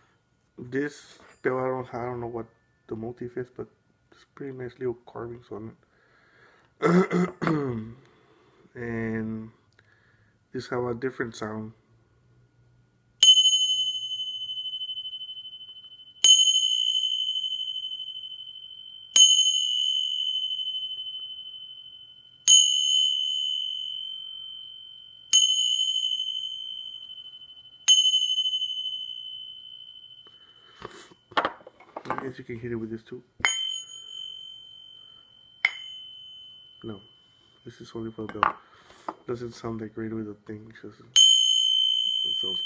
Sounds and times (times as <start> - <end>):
Bell: 13.2 - 42.6.